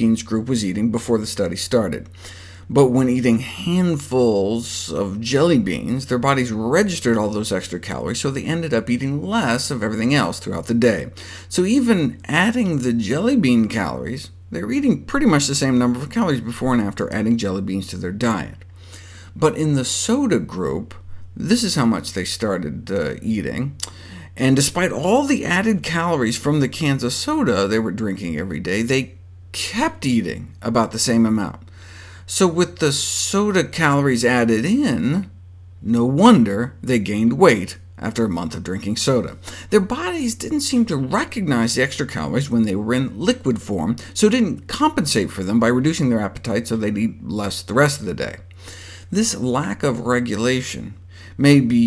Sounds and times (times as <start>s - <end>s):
Speech: 0.0s - 2.1s, 2.7s - 18.6s, 19.4s - 31.6s, 32.3s - 48.5s, 49.1s - 51.8s.